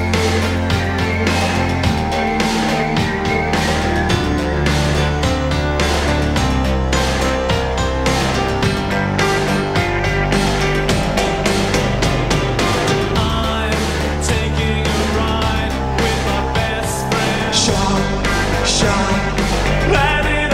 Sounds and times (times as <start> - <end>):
Music: 0.0 - 20.5.